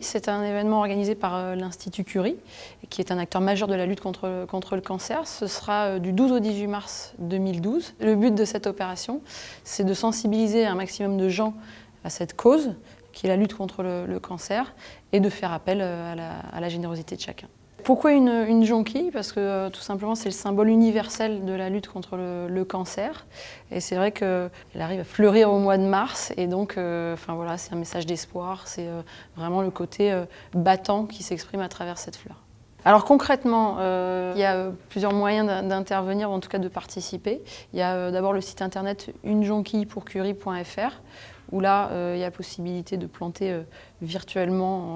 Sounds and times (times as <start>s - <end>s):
Speech: 0.0s - 44.9s.